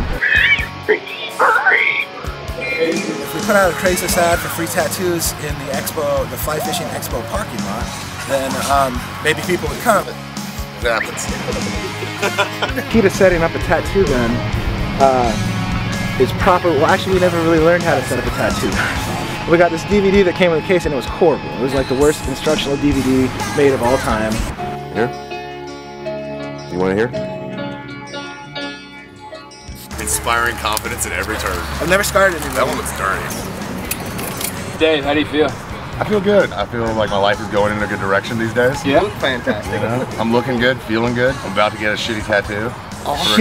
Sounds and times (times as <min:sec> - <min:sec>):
Music: 0:00.0 - 0:43.4
Speech: 0:02.7 - 0:10.2, 0:12.8 - 0:14.4, 0:16.2 - 0:18.8, 0:19.5 - 0:24.4, 0:29.8 - 0:33.4, 0:34.9 - 0:43.4.